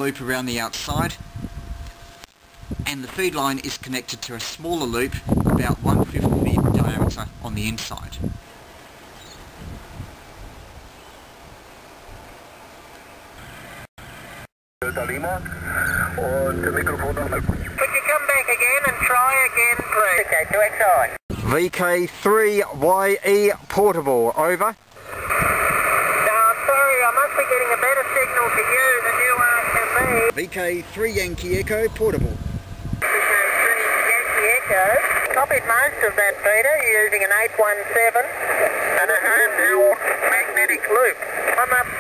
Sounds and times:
Speech: 0.0 - 1.2, 2.9 - 8.2, 14.8 - 24.8, 26.3 - 32.4
Outside, rural or natural: 0.0 - 42.0.

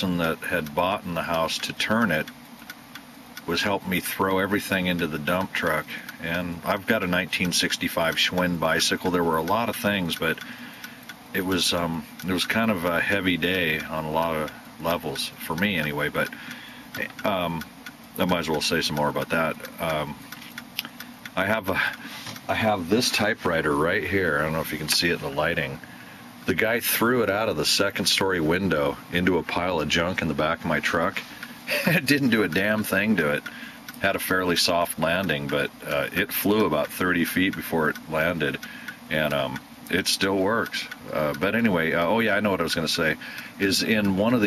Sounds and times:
Speech: 0.0 - 2.3, 3.5 - 10.4, 11.3 - 16.4, 17.0 - 20.2, 21.4 - 25.8, 26.5 - 44.4
Tick-tock: 0.0 - 44.4.

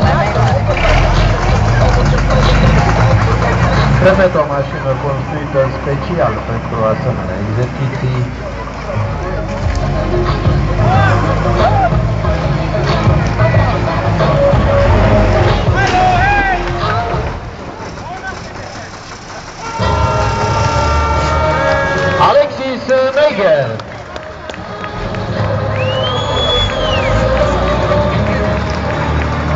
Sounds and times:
Music: 0.0 - 7.5, 8.1 - 17.7, 19.8 - 29.5
Speech: 0.0 - 8.6, 22.2 - 23.8
Truck: 0.0 - 29.5.

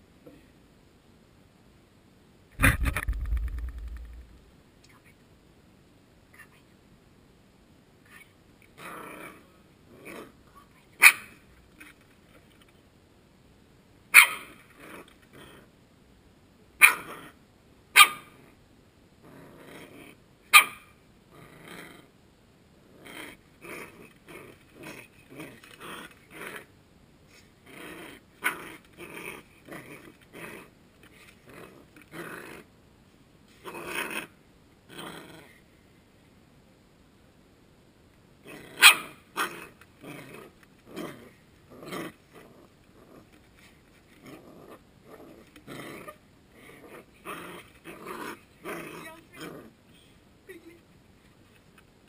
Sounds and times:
Inside, small room: 0.0 - 52.0.

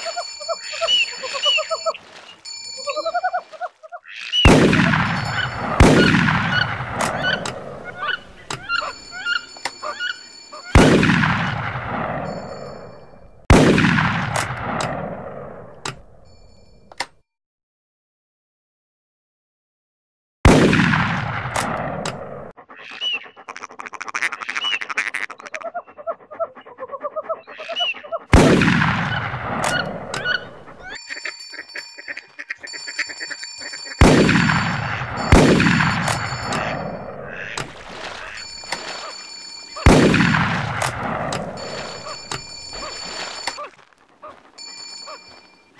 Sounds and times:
Bird: 0.0 - 4.5, 5.2 - 10.8, 22.6 - 28.3, 29.1 - 34.0.

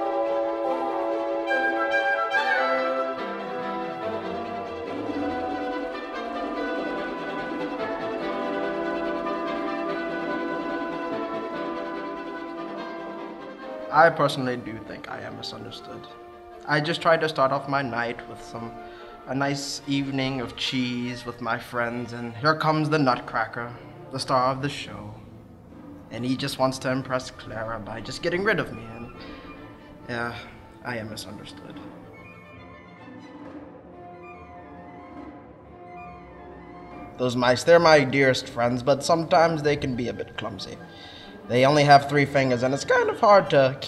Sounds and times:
Music: 0.0 - 43.8
Speech: 13.9 - 16.1, 16.7 - 18.7, 19.3 - 25.2, 26.1 - 29.1, 30.1 - 31.9, 37.2 - 40.8, 41.5 - 43.8.

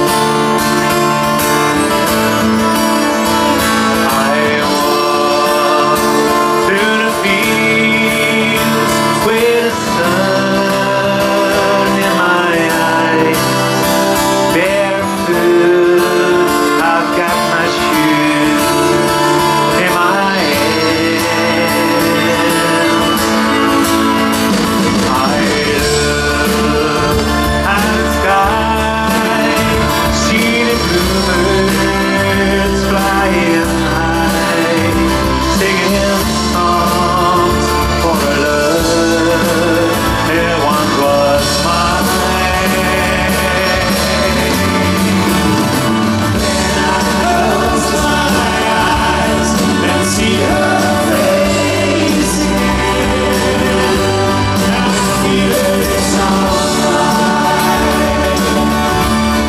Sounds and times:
Music: 0.0 - 59.4.

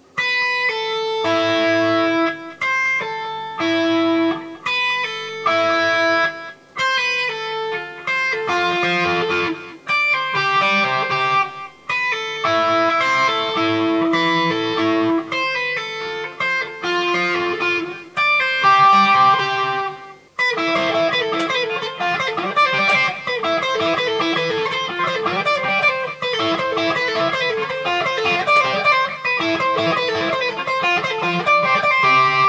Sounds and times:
Electric guitar: 0.0 - 32.4.

